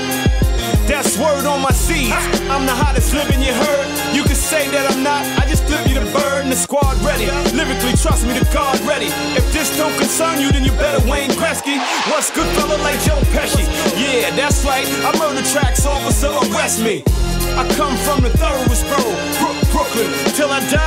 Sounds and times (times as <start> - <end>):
Soundtrack music: 0.0 - 20.8.